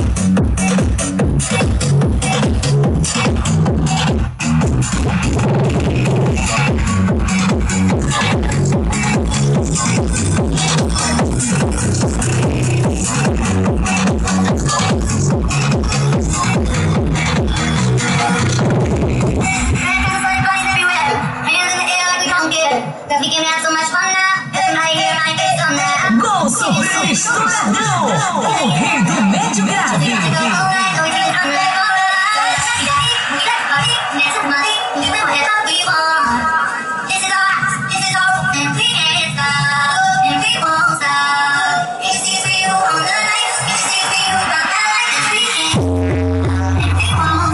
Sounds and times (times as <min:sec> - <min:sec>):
Music: 0:00.0 - 0:47.5.